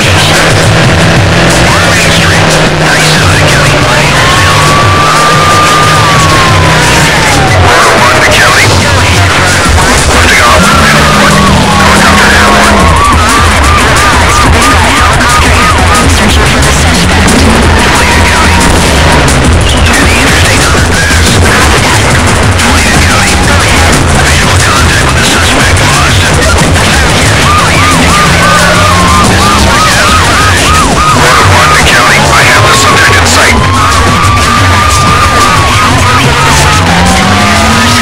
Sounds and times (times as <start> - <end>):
Music: 0.0 - 38.0
Race car, auto racing: 0.0 - 38.0
Speech: 0.0 - 38.0
Police car (siren): 1.4 - 38.0.